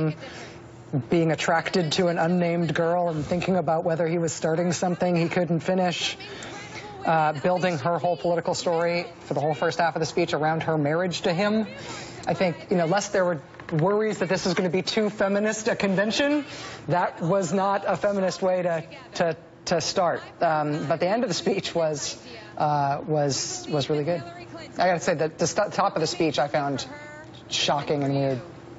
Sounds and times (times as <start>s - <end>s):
Narration, monologue: 0.0s - 28.7s
Female speech, woman speaking: 1.1s - 28.6s.